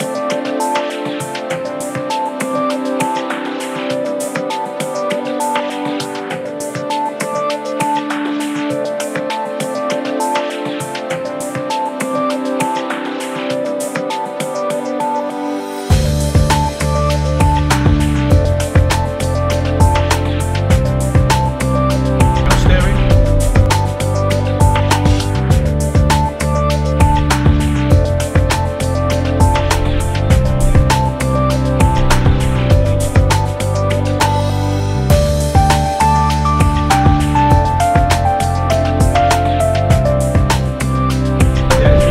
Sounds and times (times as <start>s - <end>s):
Music: 0.0s - 42.1s.